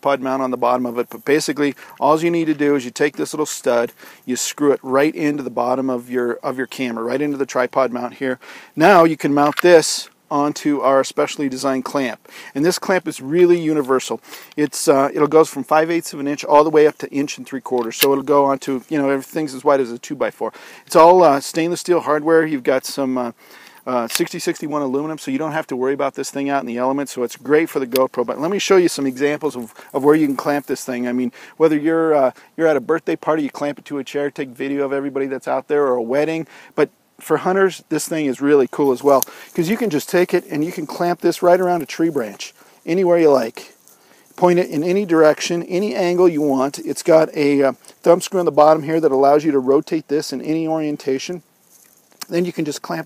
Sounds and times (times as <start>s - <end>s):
Speech: 0.0s - 43.8s, 44.4s - 51.4s, 52.2s - 53.0s.